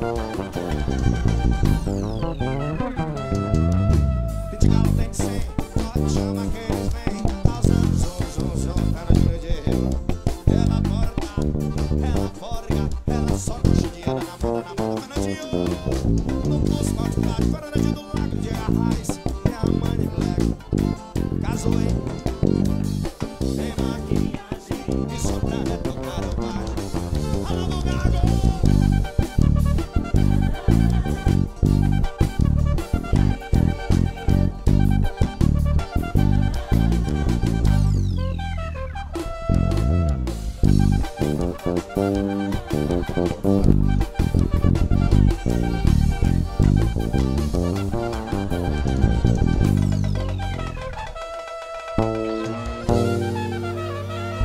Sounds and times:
Bass guitar: 0.0 - 54.4.

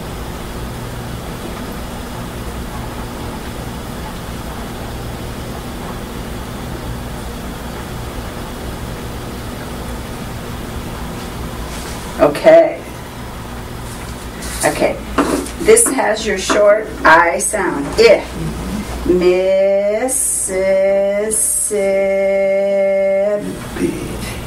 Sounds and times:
Female speech, woman speaking: 12.2 - 12.9, 14.6 - 15.0, 15.6 - 24.4.

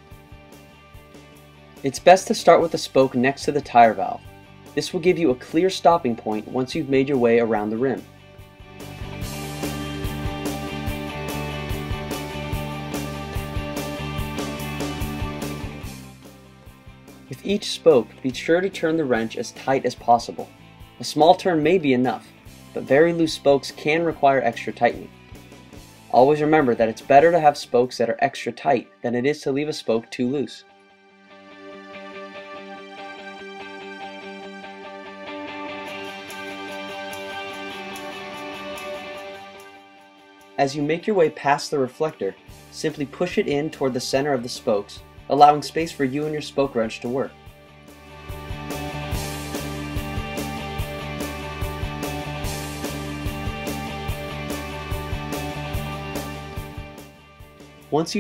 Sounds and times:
Music: 0.0 - 58.2
Speech: 1.8 - 4.2, 4.8 - 8.1, 17.3 - 25.1, 26.1 - 30.7, 40.6 - 47.4, 57.9 - 58.2.

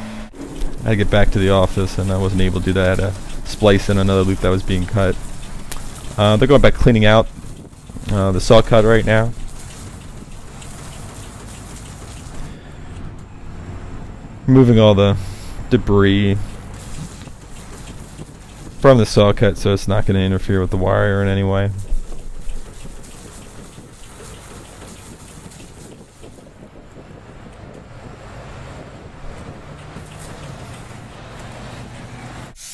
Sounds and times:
Vehicle: 0.0 - 32.7
Speech: 0.8 - 5.2, 6.2 - 7.3, 8.1 - 9.4, 14.5 - 16.5, 18.8 - 21.9.

